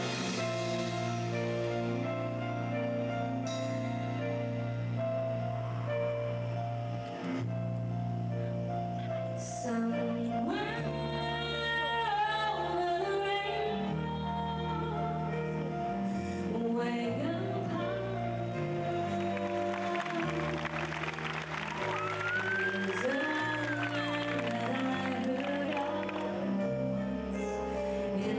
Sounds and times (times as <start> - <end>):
Music: 0.0 - 28.3
Female singing: 9.5 - 15.2, 16.5 - 20.7, 22.5 - 27.3, 28.2 - 28.3.